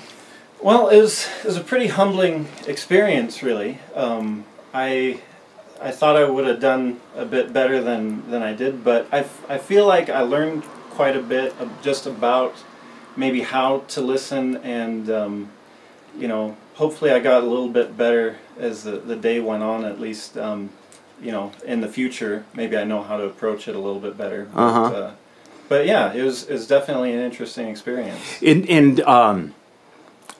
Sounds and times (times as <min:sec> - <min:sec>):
Speech: 0:00.6 - 0:12.6, 0:13.2 - 0:15.6, 0:16.2 - 0:29.6.